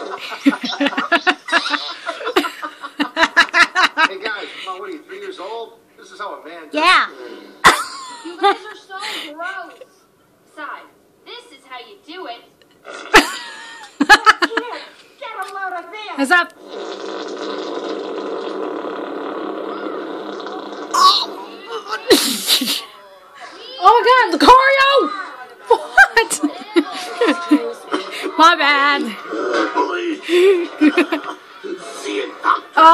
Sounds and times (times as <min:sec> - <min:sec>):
Fart: 0:12.8 - 0:13.4, 0:16.5 - 0:21.6.